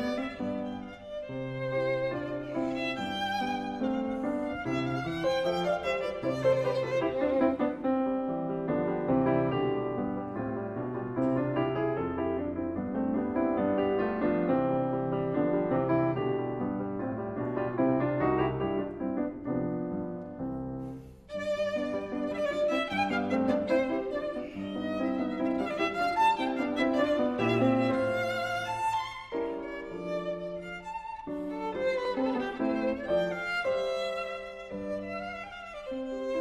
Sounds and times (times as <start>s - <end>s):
Violin, fiddle: 0.0s - 10.2s, 21.0s - 36.4s.